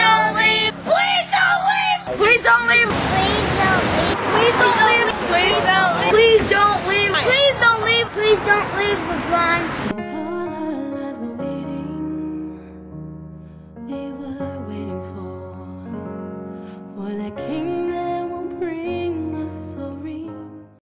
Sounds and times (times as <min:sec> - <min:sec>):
Music: 0:00.0 - 0:02.9, 0:09.9 - 0:20.8.